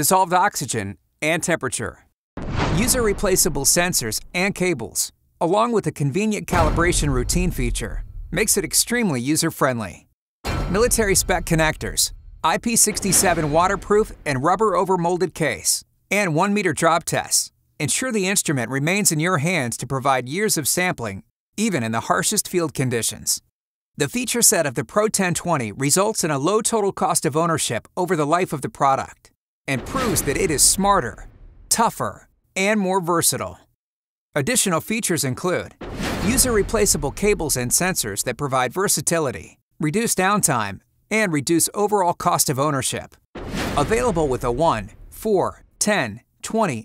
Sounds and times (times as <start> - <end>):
Speech: 0.0 - 2.1, 2.7 - 10.1, 10.7 - 33.7, 34.4 - 43.2, 43.8 - 46.8.